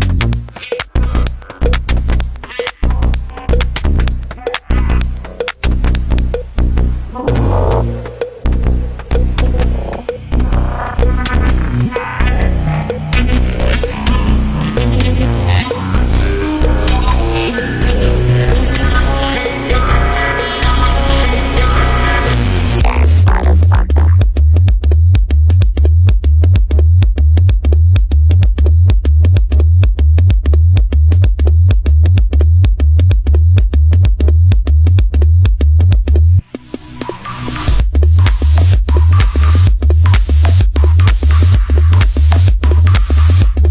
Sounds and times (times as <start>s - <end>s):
Techno: 0.0s - 43.7s
Electronic dance music: 0.5s - 6.5s, 7.1s - 43.7s.